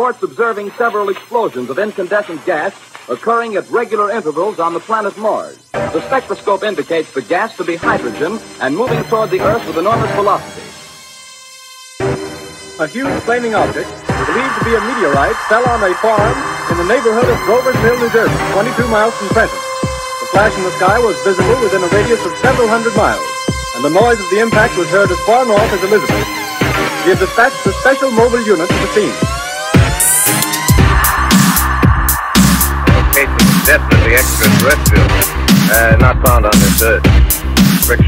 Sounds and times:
Speech: 0:00.0 - 0:10.5, 0:12.8 - 0:19.6, 0:20.2 - 0:26.3, 0:27.0 - 0:29.3, 0:33.2 - 0:37.0, 0:37.8 - 0:38.0
Dubstep: 0:00.0 - 0:38.0.

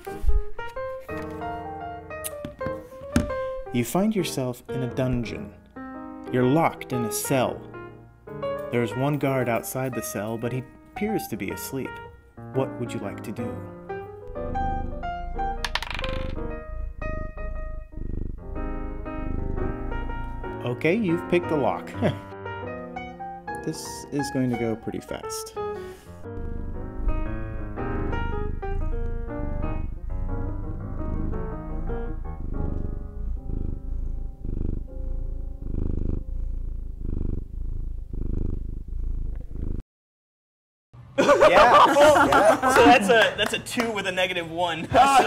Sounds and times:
Music: 0:00.0 - 0:37.4
Purr: 0:14.2 - 0:22.2, 0:25.9 - 0:39.8.

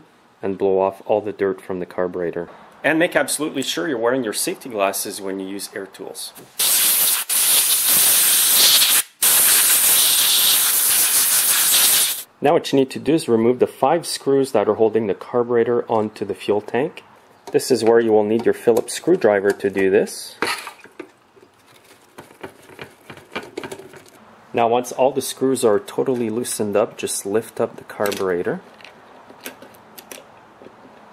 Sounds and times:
Speech: 0:00.4 - 0:06.4, 0:12.4 - 0:20.4, 0:24.6 - 0:28.6.

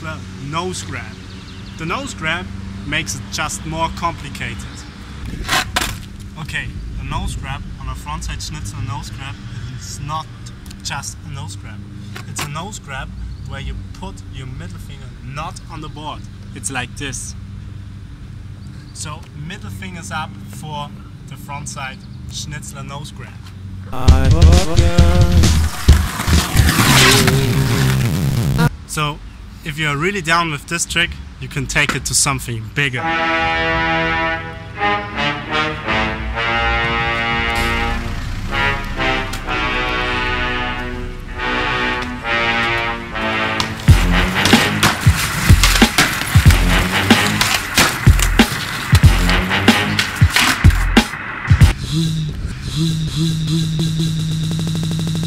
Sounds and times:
Skateboard: 0:05.3 - 0:06.1, 0:25.5 - 0:28.0, 0:43.6 - 0:51.2
Music: 0:24.0 - 0:28.7, 0:33.0 - 0:51.8.

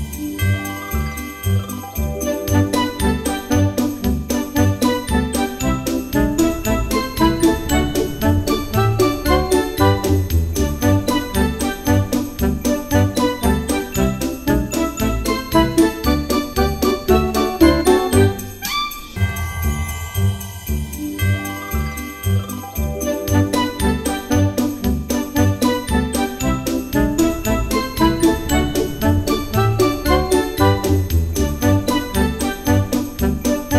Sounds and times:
Jingle, tinkle: 0:00.0 - 0:33.7.

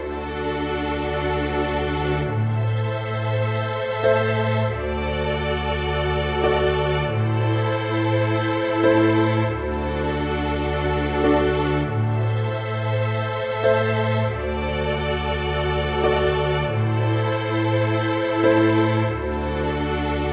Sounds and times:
Background music: 0:00.0 - 0:20.3.

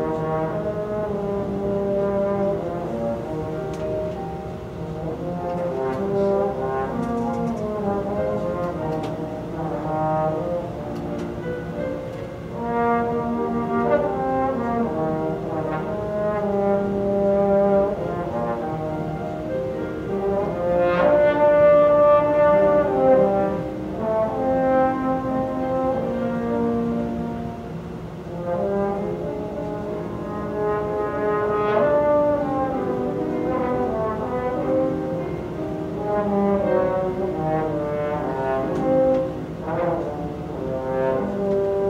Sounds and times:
Trombone: 0:00.0 - 0:41.8.

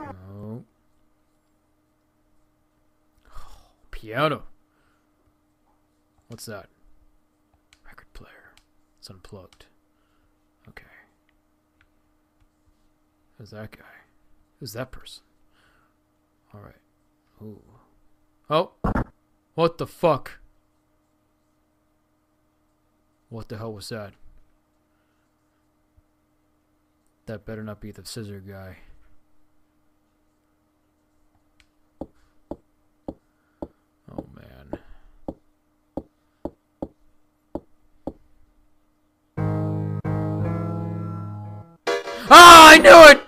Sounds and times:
Speech: 0:00.0 - 0:00.7, 0:04.0 - 0:04.5, 0:06.3 - 0:06.7, 0:07.9 - 0:09.8, 0:13.4 - 0:15.3, 0:16.5 - 0:17.9, 0:19.6 - 0:20.4, 0:23.3 - 0:24.2, 0:27.3 - 0:29.0, 0:34.1 - 0:34.9, 0:42.3 - 0:43.2.

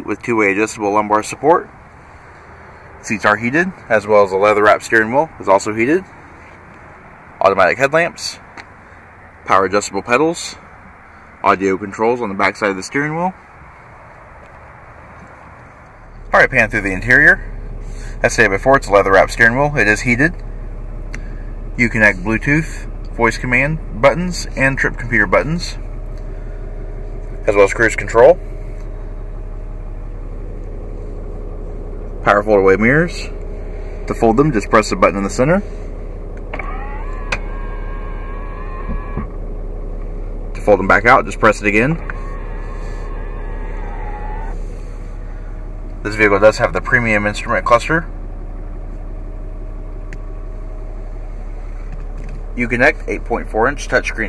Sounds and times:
Speech: 0:00.0 - 0:01.7, 0:03.0 - 0:06.2, 0:07.4 - 0:08.5, 0:09.4 - 0:10.6, 0:11.4 - 0:13.4, 0:16.3 - 0:17.5, 0:18.2 - 0:20.4, 0:21.8 - 0:25.9, 0:27.4 - 0:28.4, 0:32.2 - 0:33.4, 0:34.1 - 0:35.7, 0:40.5 - 0:42.2, 0:46.0 - 0:48.1, 0:52.5 - 0:54.2
Car: 0:00.0 - 0:54.2.

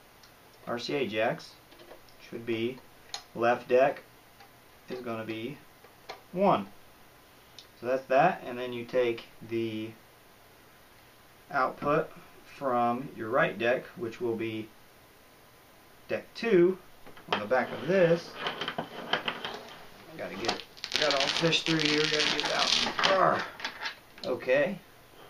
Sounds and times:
Speech: 0:00.7 - 0:01.6, 0:02.2 - 0:02.8, 0:03.4 - 0:04.0, 0:04.9 - 0:05.6, 0:07.8 - 0:10.0, 0:11.5 - 0:14.8, 0:16.1 - 0:18.4, 0:20.1 - 0:23.5, 0:24.2 - 0:24.8.

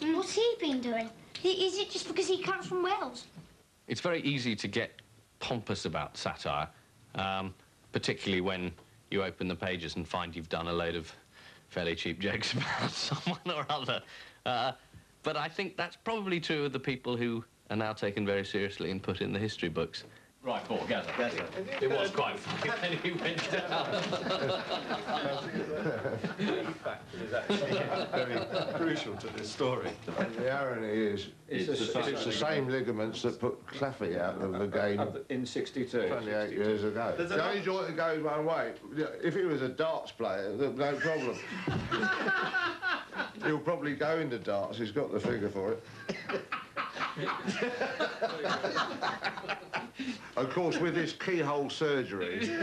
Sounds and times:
Speech: 0:03.9 - 0:24.0, 0:26.6 - 0:41.4, 0:43.4 - 0:45.8, 0:50.4 - 0:52.6
Laughter: 0:12.6 - 0:13.7, 0:23.5 - 0:30.4, 0:40.9 - 0:43.6, 0:45.9 - 0:50.0, 0:52.2 - 0:52.6.

